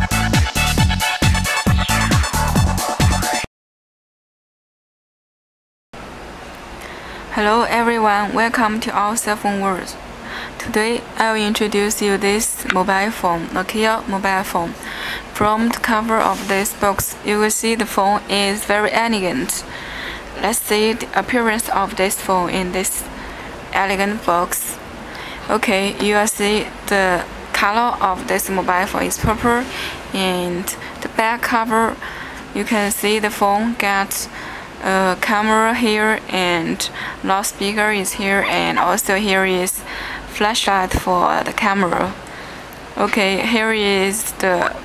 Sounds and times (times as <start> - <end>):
Speech: 7.3 - 10.0, 10.6 - 19.7, 20.4 - 23.1, 23.7 - 24.8, 25.5 - 42.2, 43.0 - 44.8.